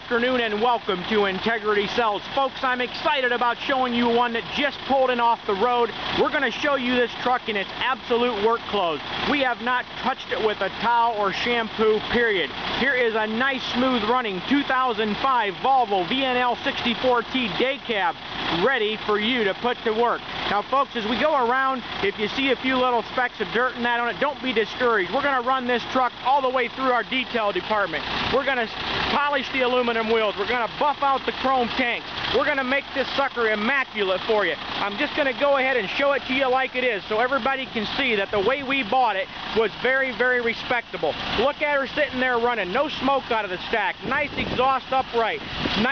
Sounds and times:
Idling: 0.0s - 45.9s
Medium engine (mid frequency): 0.0s - 45.9s
Speech: 0.0s - 45.9s
Vehicle: 0.0s - 45.9s.

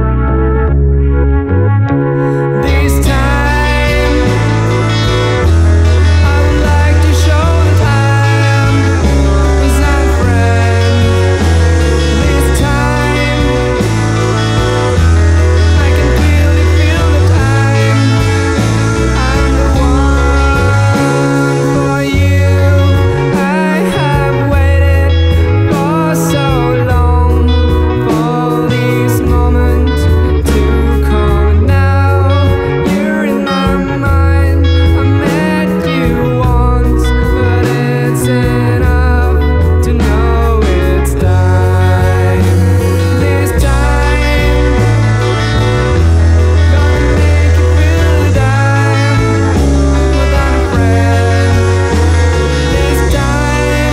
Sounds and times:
Music: 0.0s - 53.9s.

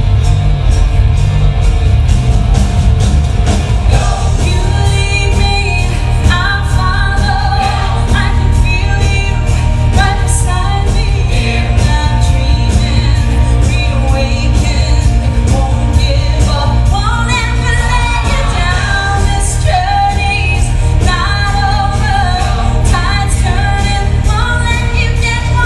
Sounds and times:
Music: 0.0s - 25.6s.

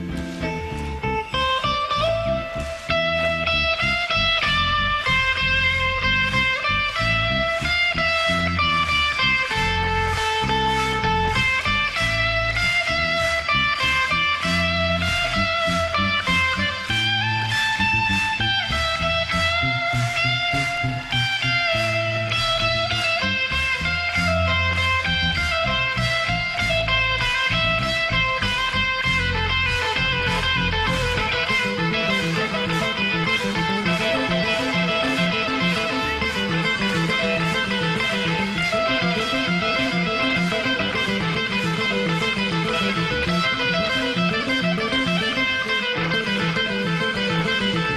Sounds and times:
Music: 0.0s - 47.9s.

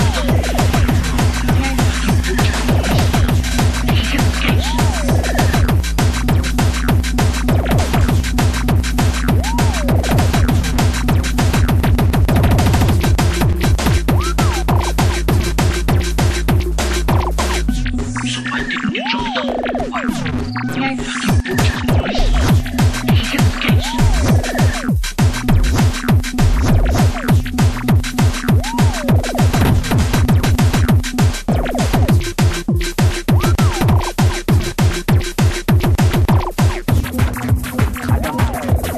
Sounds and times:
Music: 0.0s - 38.9s
Speech: 1.4s - 2.9s, 3.9s - 5.6s, 18.5s - 20.1s, 20.7s - 21.2s, 23.1s - 24.8s, 38.0s - 38.8s.

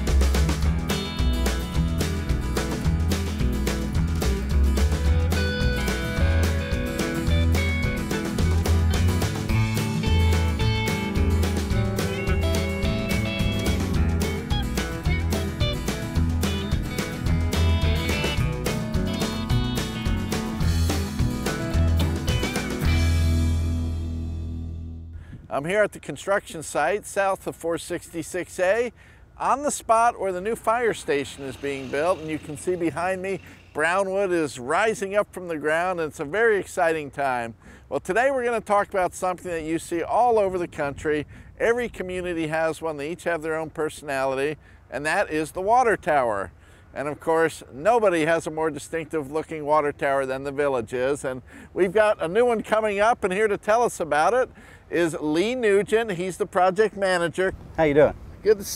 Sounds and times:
Speech: 25.5s - 58.7s.

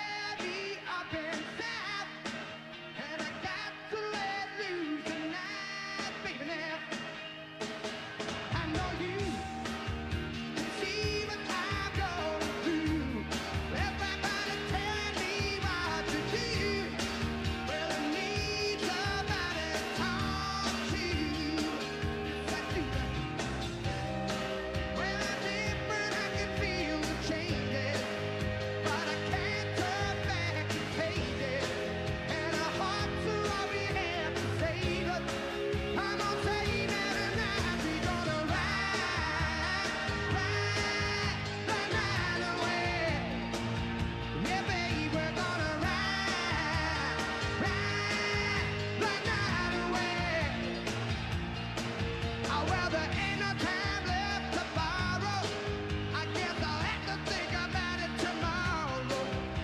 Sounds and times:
Male singing: 0.0s - 2.2s, 3.0s - 7.2s, 8.5s - 9.6s, 10.6s - 23.2s, 25.0s - 43.4s, 44.4s - 50.8s, 52.5s - 59.6s
Music: 0.0s - 59.6s.

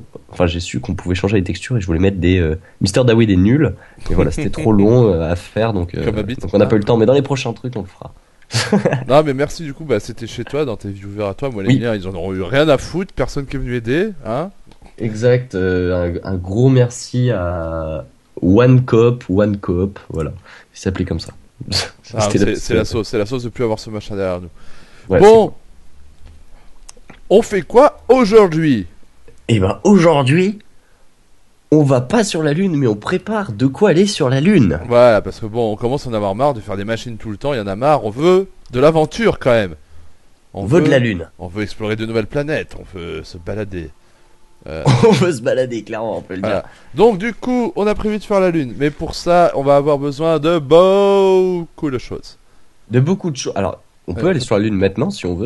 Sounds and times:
Speech: 0.0s - 24.5s, 25.1s - 25.6s, 27.3s - 28.9s, 29.5s - 30.6s, 31.7s - 39.8s, 40.6s - 43.9s, 44.6s - 55.4s.

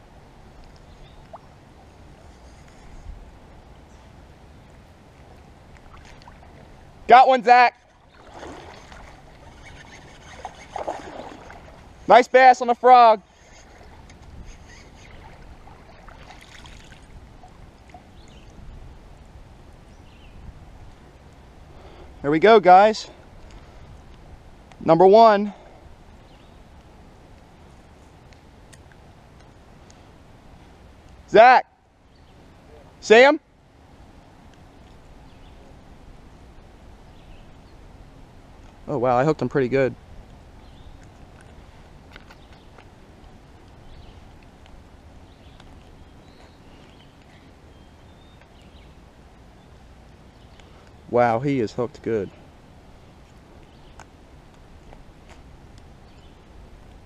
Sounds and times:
Speech: 7.1s - 7.8s, 12.1s - 13.2s, 22.2s - 23.2s, 24.8s - 25.6s, 32.7s - 33.4s, 38.9s - 40.0s, 51.1s - 52.4s.

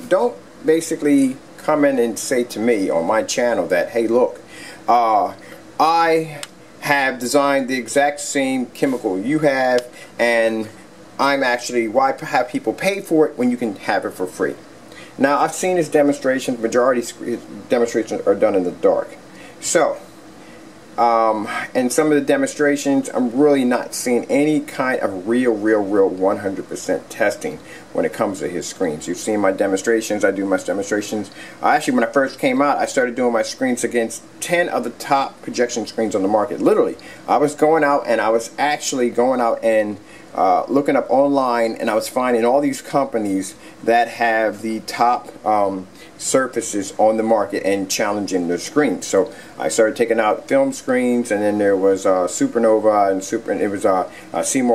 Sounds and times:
Speech: 0.0s - 20.1s, 21.0s - 54.7s.

